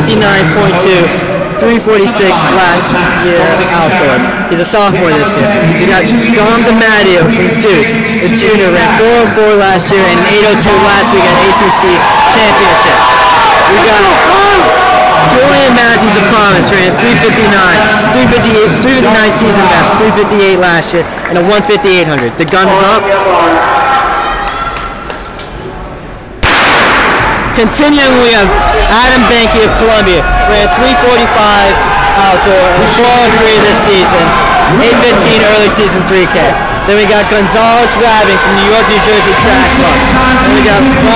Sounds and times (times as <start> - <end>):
Speech: 0.0 - 13.0, 13.7 - 23.6, 27.6 - 41.1.